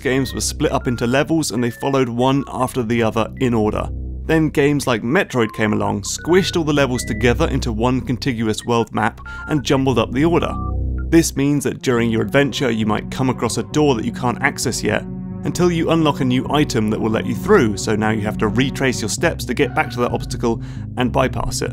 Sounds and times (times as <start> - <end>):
Music: 0.0 - 21.7
Speech: 0.0 - 21.7.